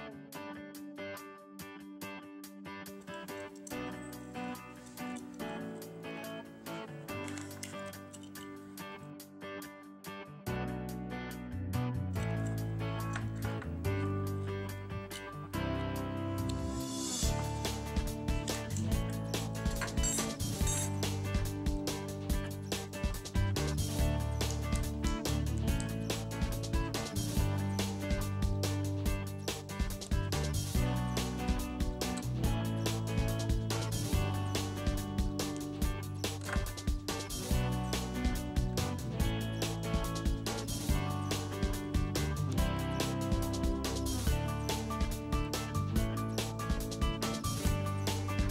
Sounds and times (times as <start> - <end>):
Music: 0.0 - 48.5.